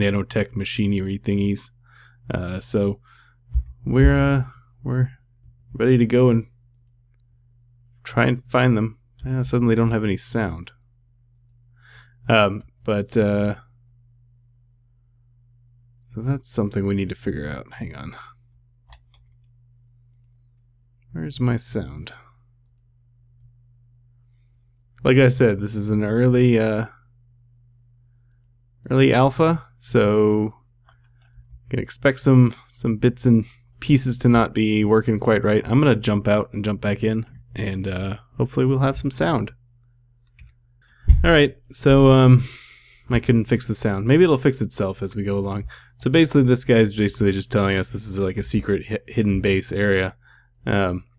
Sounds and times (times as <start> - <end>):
Speech: 0.0 - 3.0, 3.8 - 6.5, 8.0 - 10.8, 12.3 - 13.7, 16.0 - 18.4, 21.1 - 22.3, 25.0 - 27.0, 28.8 - 30.6, 31.7 - 39.6, 41.1 - 51.1.